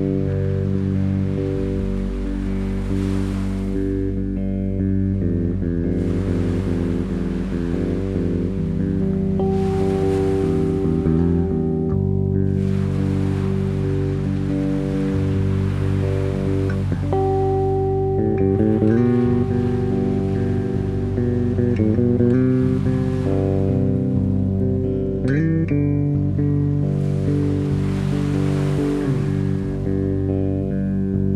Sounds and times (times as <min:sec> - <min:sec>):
Music: 0:00.0 - 0:31.3.